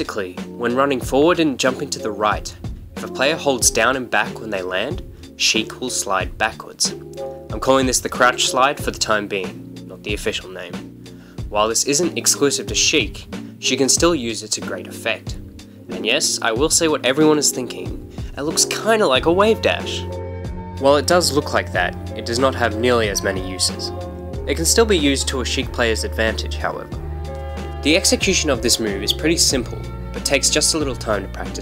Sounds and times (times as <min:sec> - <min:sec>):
Speech: 0:00.0 - 0:10.8, 0:11.5 - 0:20.1, 0:20.8 - 0:27.0, 0:27.8 - 0:31.6
Music: 0:00.0 - 0:31.6.